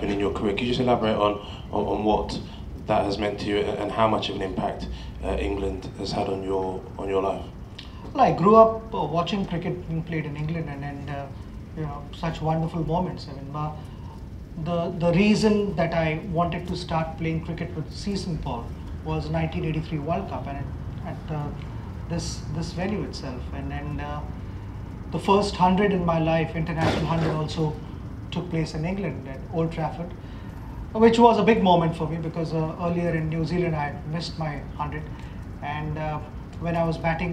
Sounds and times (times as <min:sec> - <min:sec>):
Speech: 0:00.0 - 0:07.5, 0:08.1 - 0:13.8, 0:14.6 - 0:24.3, 0:25.1 - 0:30.2, 0:30.9 - 0:37.3.